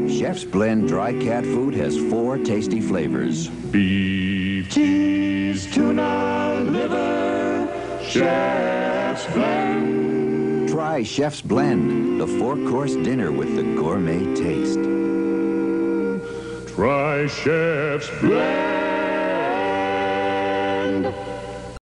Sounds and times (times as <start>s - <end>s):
Music: 0.0s - 21.8s
Speech: 10.7s - 14.8s.